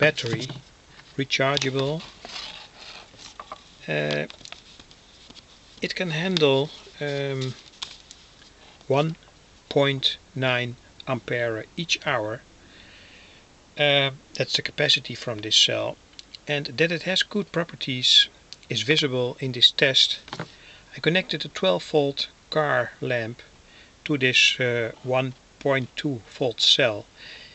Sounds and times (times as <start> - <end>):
Speech: 0.0 - 0.6, 1.2 - 2.1, 3.8 - 4.3, 5.8 - 7.6, 8.9 - 12.4, 13.8 - 20.2, 20.9 - 23.5, 24.1 - 27.1.